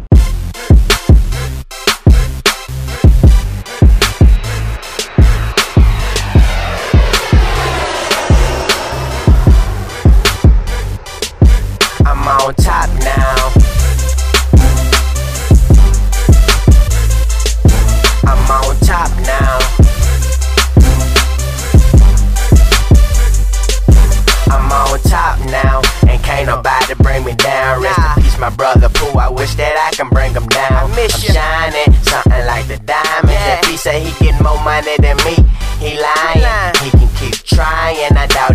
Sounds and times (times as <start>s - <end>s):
Rhythm and blues: 0.1s - 38.5s.